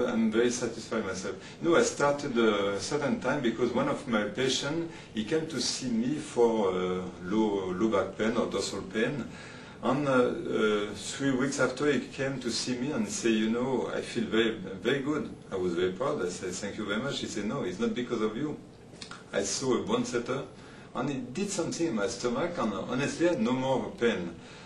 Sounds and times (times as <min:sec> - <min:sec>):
Speech: 0:00.0 - 0:24.4.